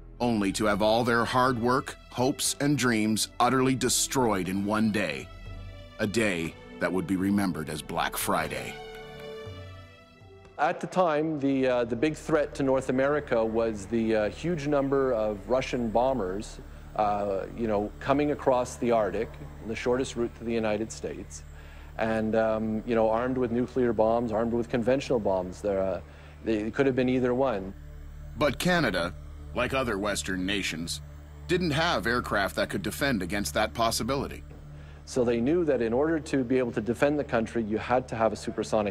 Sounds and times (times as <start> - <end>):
Music: 0.0 - 38.9
Speech: 0.2 - 5.3, 6.0 - 8.8, 10.6 - 21.4, 22.0 - 27.7, 28.4 - 34.4, 35.1 - 38.9.